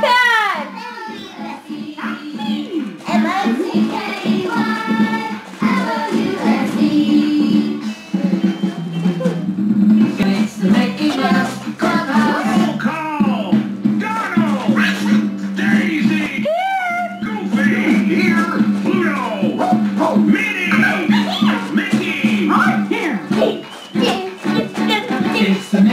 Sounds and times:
Dance music: 0.0 - 25.9.

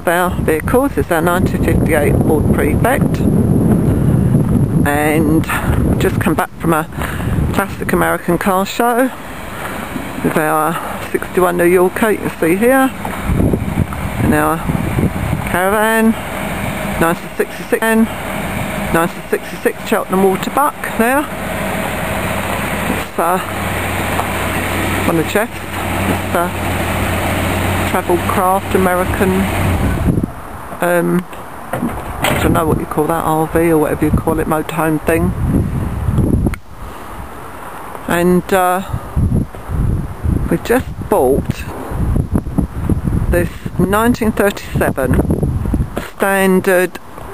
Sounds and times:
Speech: 0.0 - 3.3, 4.8 - 6.9, 7.5 - 9.2, 10.2 - 13.0, 14.3 - 14.7, 15.5 - 16.2, 17.0 - 18.1, 18.9 - 21.3, 22.9 - 23.5, 25.1 - 25.7, 26.3 - 26.6, 27.9 - 29.5, 30.8 - 31.4, 32.3 - 35.4, 38.1 - 39.0, 40.5 - 41.8, 43.3 - 45.2, 46.0 - 47.0
Vehicle: 0.0 - 47.3.

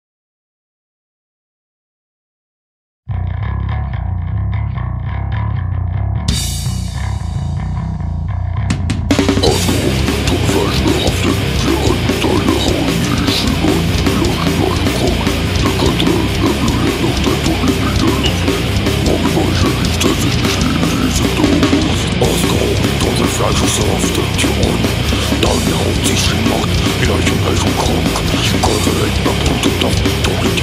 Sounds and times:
Music: 3.1 - 30.6.

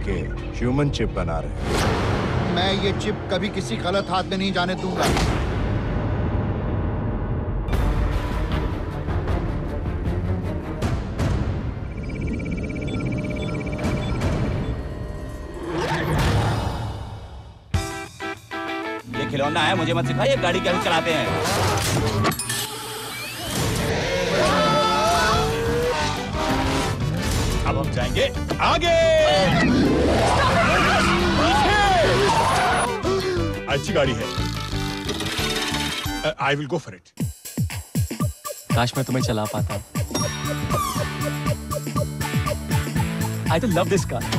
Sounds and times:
Music: 0.0 - 36.6, 37.2 - 44.3.

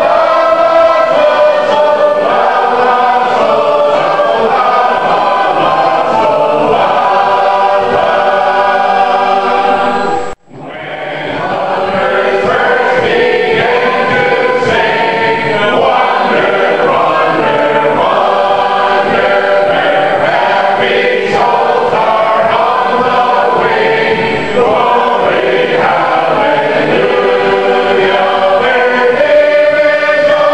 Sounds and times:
Choir: 0.0 - 30.5.

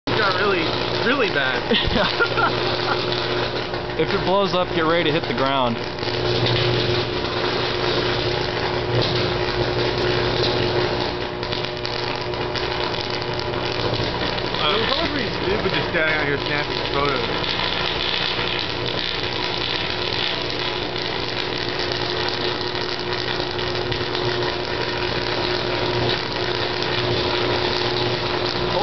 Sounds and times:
Speech: 0.1 - 1.6, 4.0 - 5.8, 14.6 - 17.3.

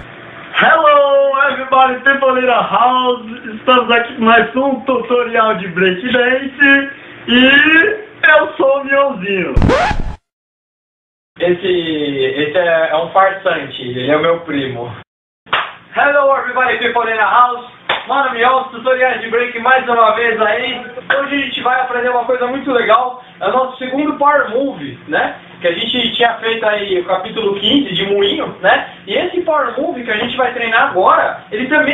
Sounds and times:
Speech: 0.6 - 9.6, 11.4 - 15.0, 15.9 - 31.9.

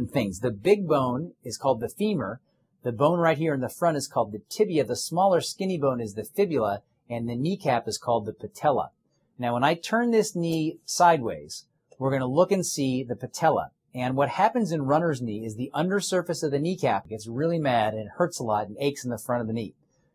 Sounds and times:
Speech: 0.0 - 19.7.

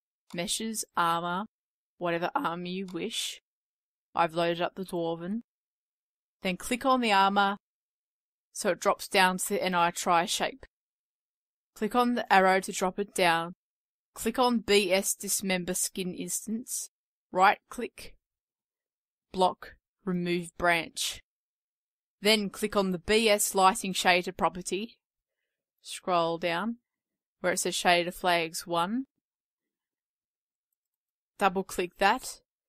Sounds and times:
Speech: 0.3 - 3.4, 4.2 - 5.5, 6.4 - 7.6, 8.6 - 10.7, 11.8 - 13.6, 14.2 - 18.2, 19.4 - 21.2, 22.2 - 25.0, 25.9 - 26.8, 27.4 - 29.1, 31.4 - 32.4.

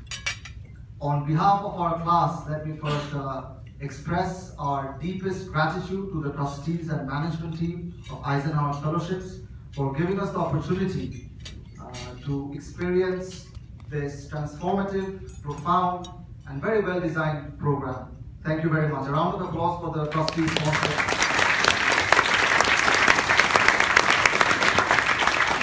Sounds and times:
Narration, monologue: 0.0 - 21.2
Male speech, man speaking: 1.0 - 11.1, 11.8 - 21.0.

